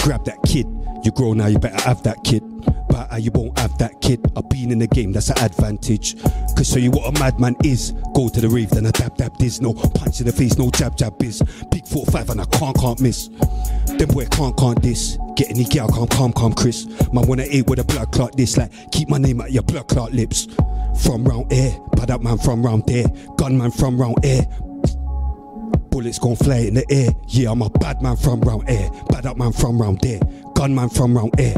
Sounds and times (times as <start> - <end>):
Hip hop music: 0.0 - 31.5.